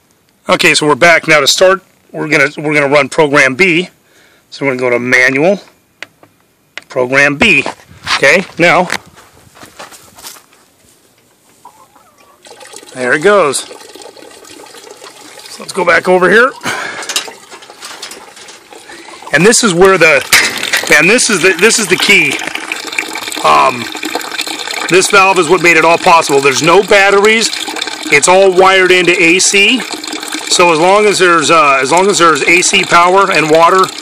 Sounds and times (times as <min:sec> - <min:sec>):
Speech: 0:00.4 - 0:05.7, 0:06.9 - 0:09.0, 0:12.9 - 0:13.7, 0:15.5 - 0:16.6, 0:19.3 - 0:20.3, 0:20.9 - 0:22.4, 0:23.4 - 0:23.9, 0:24.9 - 0:29.9, 0:30.5 - 0:34.0
Chicken, rooster: 0:11.6 - 0:12.5.